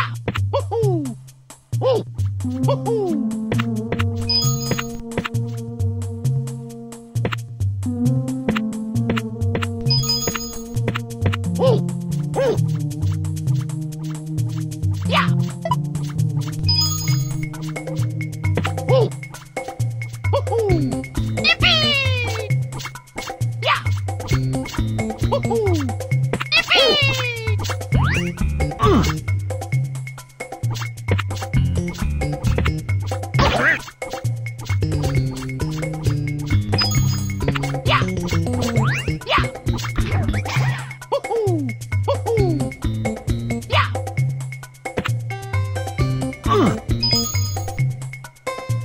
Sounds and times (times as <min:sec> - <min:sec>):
Music: 0:00.0 - 0:48.8.